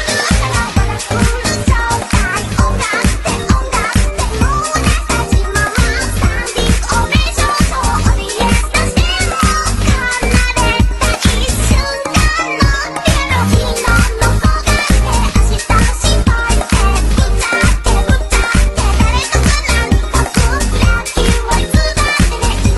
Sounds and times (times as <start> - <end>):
Music: 0.0 - 22.7.